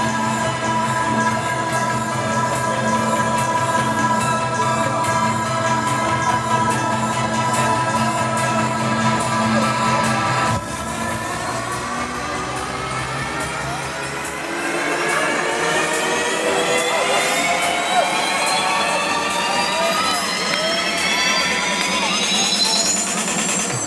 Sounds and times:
Music: 0.0s - 23.8s.

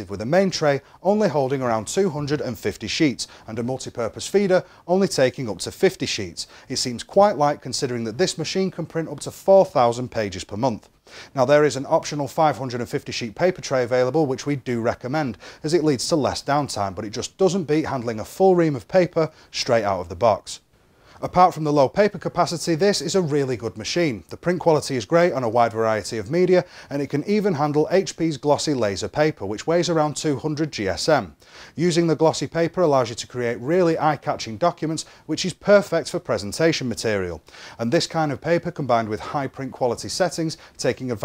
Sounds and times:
Speech: 0.0s - 20.6s, 21.2s - 41.2s.

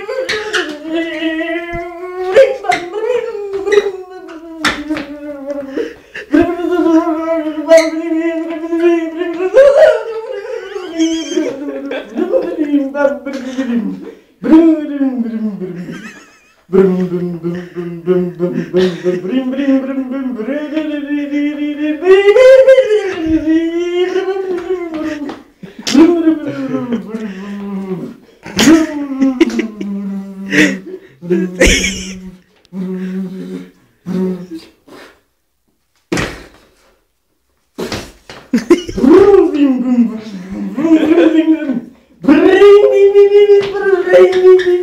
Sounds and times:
Speech: 0.0s - 16.0s, 16.7s - 34.7s, 39.0s - 44.8s.

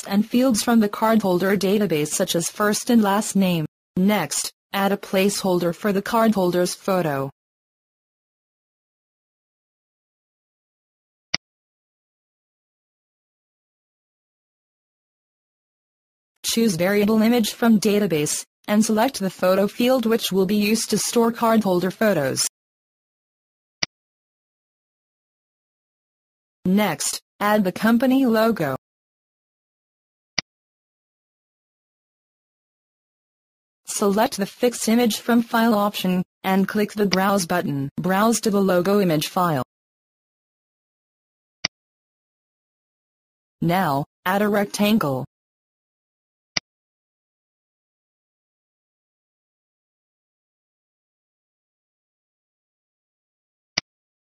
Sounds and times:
Speech: 0.0s - 7.3s, 16.4s - 22.5s, 26.7s - 28.8s, 33.9s - 39.7s, 43.6s - 45.3s.

